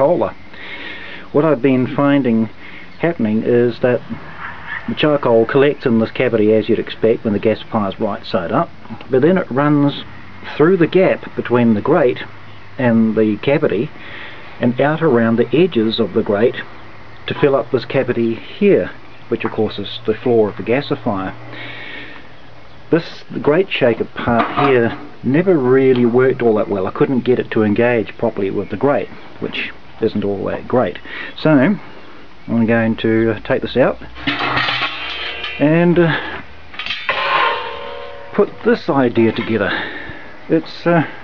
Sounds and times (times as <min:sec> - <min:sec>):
Speech: 0:00.0 - 0:00.4, 0:01.3 - 0:13.9, 0:14.6 - 0:21.4, 0:22.9 - 0:31.9, 0:32.5 - 0:34.1, 0:35.5 - 0:36.4, 0:38.4 - 0:41.2.